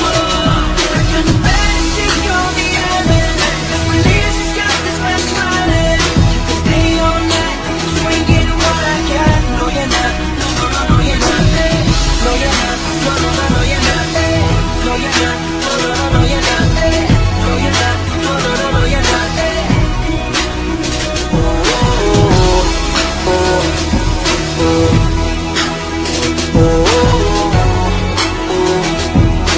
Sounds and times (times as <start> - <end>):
Music: 0.0 - 29.5
Singing: 0.0 - 29.5.